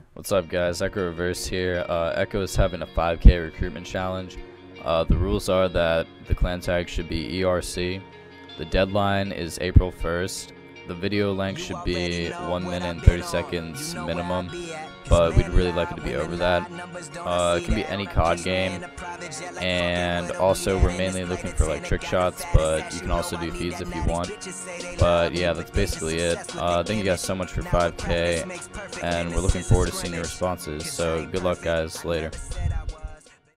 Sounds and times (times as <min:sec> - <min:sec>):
Music: 0:00.0 - 0:33.5
Speech: 0:00.2 - 0:08.0, 0:08.6 - 0:18.9, 0:19.6 - 0:24.4, 0:25.0 - 0:32.8.